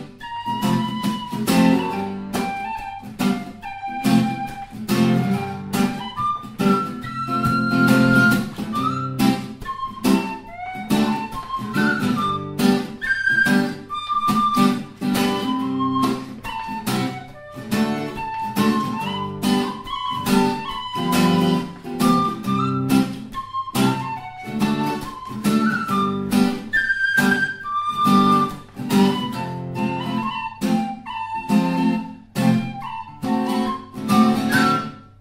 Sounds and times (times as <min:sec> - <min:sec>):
Music: 0:00.0 - 0:35.2.